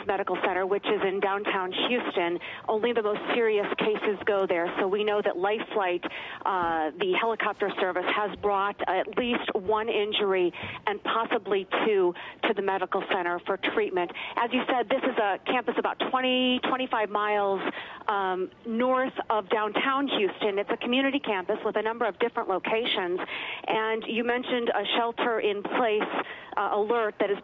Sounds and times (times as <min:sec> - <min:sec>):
Speech: 0:00.0 - 0:27.4.